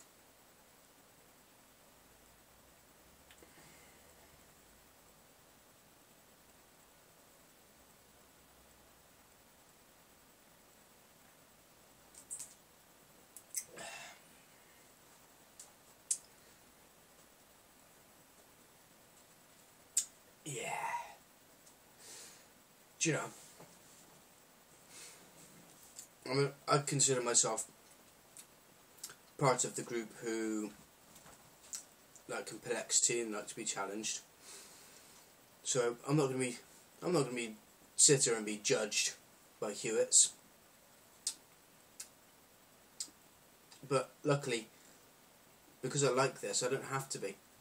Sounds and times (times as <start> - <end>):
Silence: 0.0 - 32.3, 34.2 - 38.0, 40.3 - 45.9.